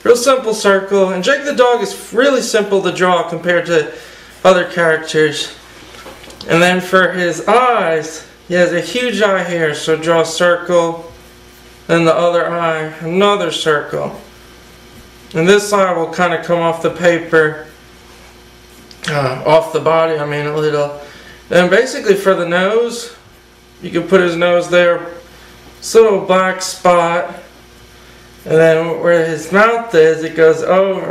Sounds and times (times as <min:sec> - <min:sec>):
Speech: 0:00.0 - 0:05.6, 0:06.4 - 0:11.2, 0:11.9 - 0:14.3, 0:15.3 - 0:17.8, 0:18.9 - 0:27.6, 0:28.4 - 0:31.1.